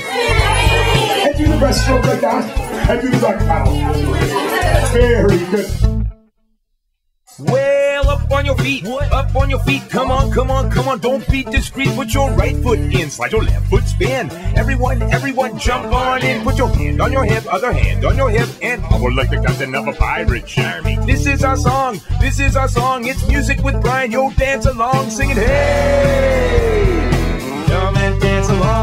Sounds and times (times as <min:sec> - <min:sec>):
Music: 0:00.0 - 0:06.3, 0:07.3 - 0:28.8.